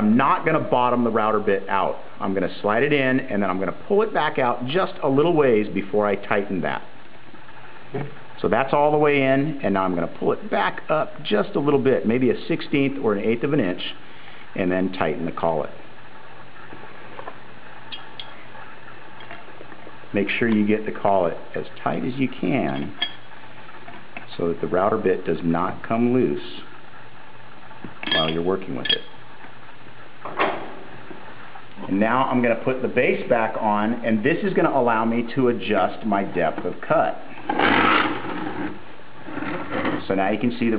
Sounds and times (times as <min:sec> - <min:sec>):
Speech: 0:00.0 - 0:06.9, 0:08.0 - 0:14.0, 0:14.6 - 0:15.8, 0:20.1 - 0:23.0, 0:24.3 - 0:26.7, 0:28.1 - 0:29.1, 0:31.8 - 0:37.3, 0:40.0 - 0:40.7.